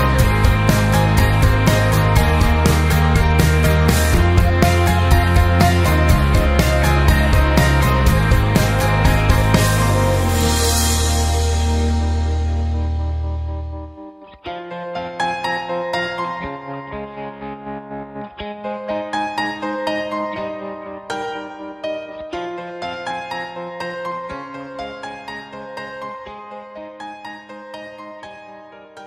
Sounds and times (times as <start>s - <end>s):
Music: 0.0s - 29.0s.